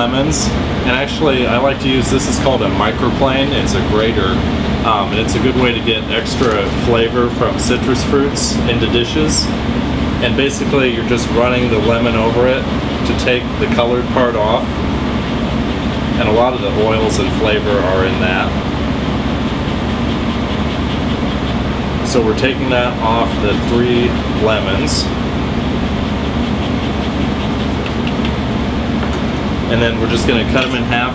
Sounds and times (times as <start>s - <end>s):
Speech: 0.0s - 9.6s, 10.2s - 14.7s, 16.2s - 18.6s, 22.0s - 25.2s, 29.7s - 31.1s.